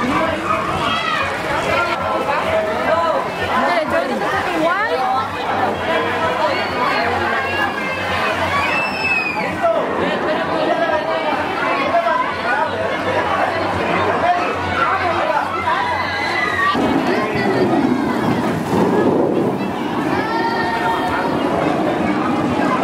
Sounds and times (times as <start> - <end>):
Chatter: 0.0 - 22.8.